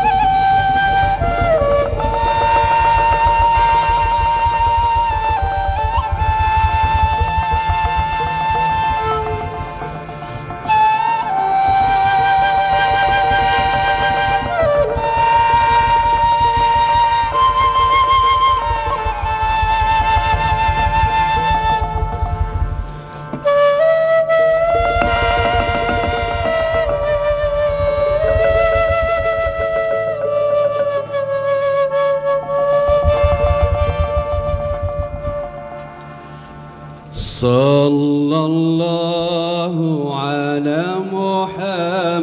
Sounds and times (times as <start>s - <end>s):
Music: 0.0s - 42.2s.